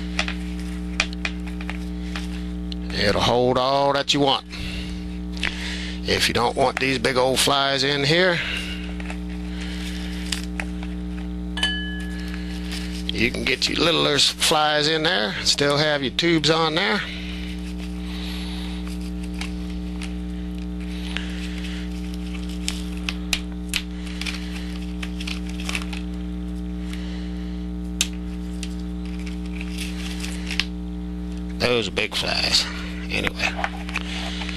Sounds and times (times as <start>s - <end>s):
Speech: 2.9s - 4.4s, 6.0s - 8.5s, 13.1s - 17.1s, 31.6s - 33.5s.